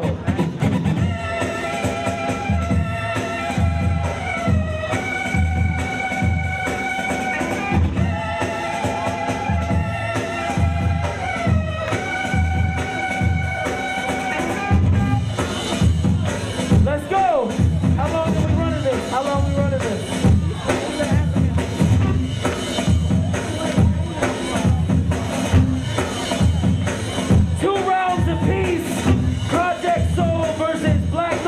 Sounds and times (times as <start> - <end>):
Music: 0.0 - 31.4
Speech: 16.8 - 22.0, 22.9 - 26.8, 27.4 - 31.4.